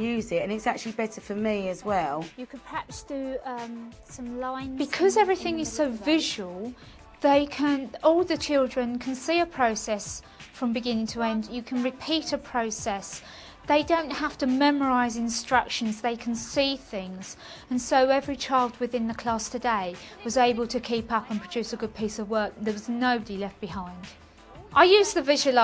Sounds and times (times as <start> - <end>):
Female speech, woman speaking: 0.0 - 25.6.